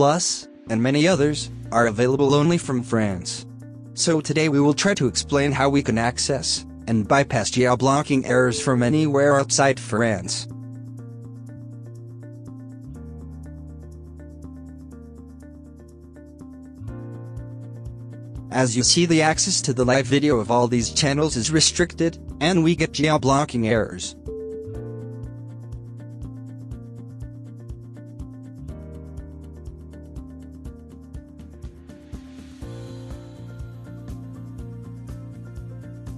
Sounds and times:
Speech: 0.0 - 3.4, 4.0 - 10.5, 18.5 - 24.2
Music: 0.0 - 36.1.

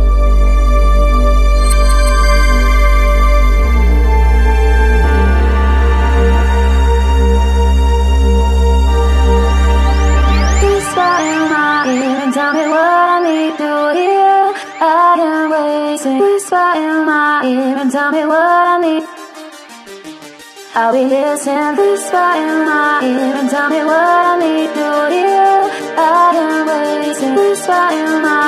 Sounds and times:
Electronic music: 0.0 - 28.4.

